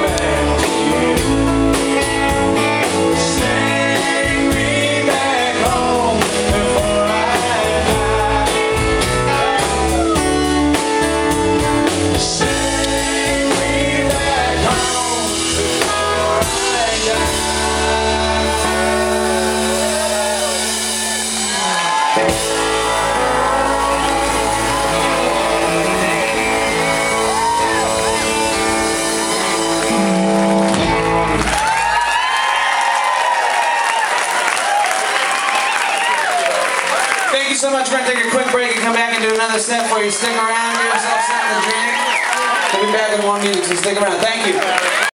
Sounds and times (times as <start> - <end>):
Male speech, man speaking: 37.3 - 44.8.